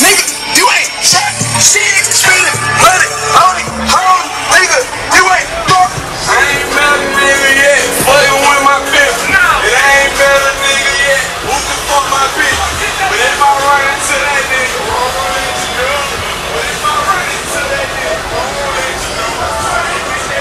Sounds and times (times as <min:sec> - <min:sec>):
Music: 0:00.0 - 0:20.4.